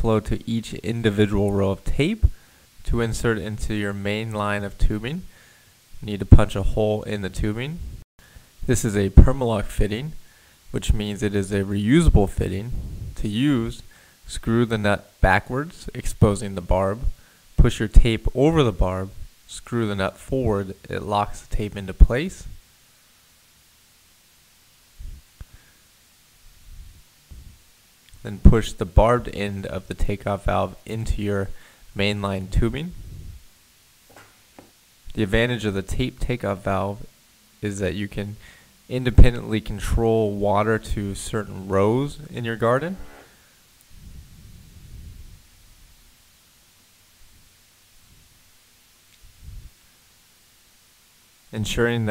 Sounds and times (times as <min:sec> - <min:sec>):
Speech: 0:00.0 - 0:05.3, 0:06.0 - 0:07.9, 0:08.6 - 0:22.6, 0:28.2 - 0:33.0, 0:35.1 - 0:43.1, 0:51.5 - 0:52.1.